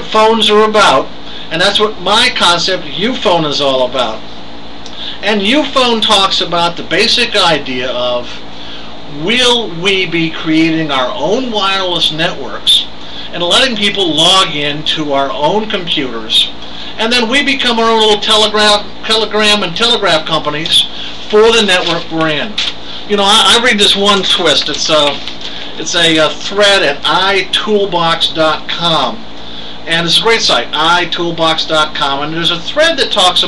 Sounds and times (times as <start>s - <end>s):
Speech: 0.0s - 4.3s, 5.1s - 8.4s, 9.1s - 33.4s.